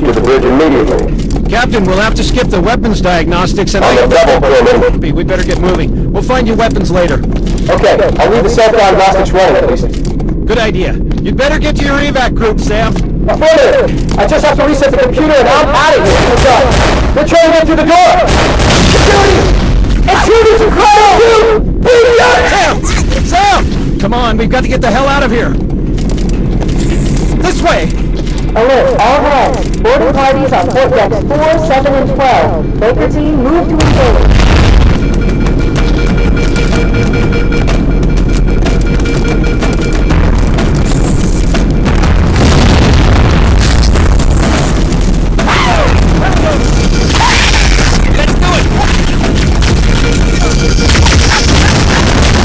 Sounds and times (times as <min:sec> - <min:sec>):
Gunshot, gunfire: 0:16.1 - 0:17.2, 0:18.2 - 0:19.8, 0:48.9 - 0:52.4.